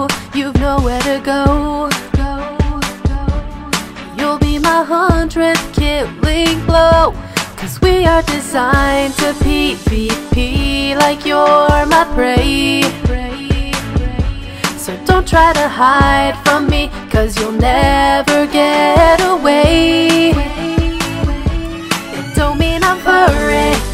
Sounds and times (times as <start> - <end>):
Music: 0.0 - 23.9.